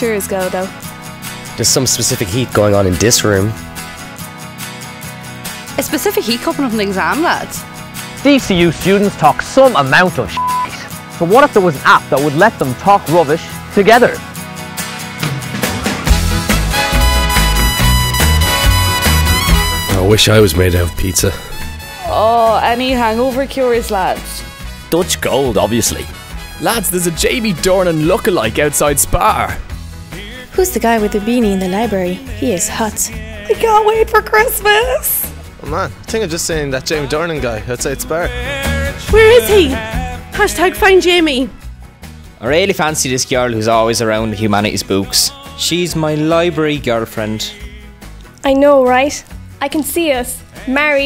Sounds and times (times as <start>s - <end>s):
Music: 0.0s - 51.0s.